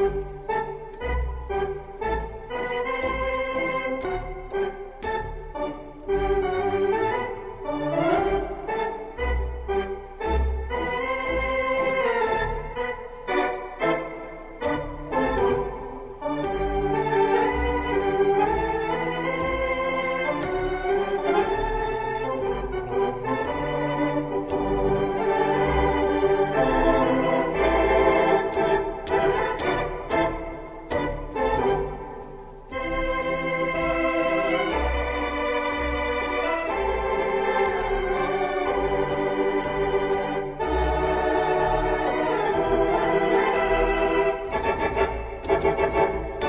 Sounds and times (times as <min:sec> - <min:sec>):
Music: 0:00.0 - 0:46.4.